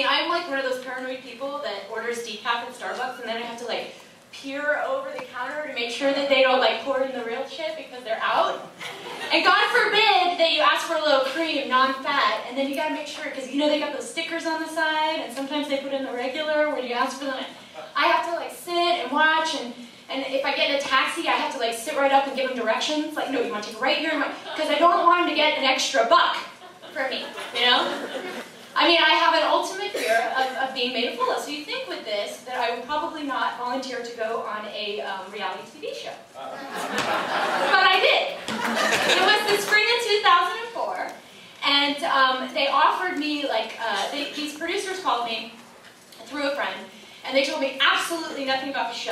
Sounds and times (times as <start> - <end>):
Speech: 0.0 - 8.7, 9.3 - 28.0, 28.8 - 36.6, 39.1 - 45.6, 46.2 - 49.1.